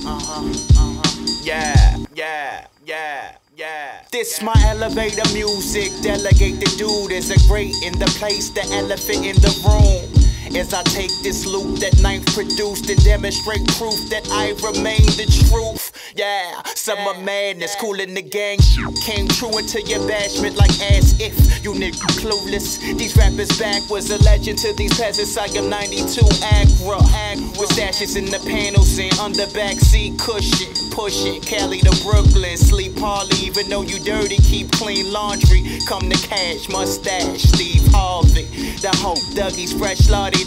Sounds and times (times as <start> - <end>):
Music: 0.0 - 2.1, 4.5 - 16.0, 18.6 - 40.4.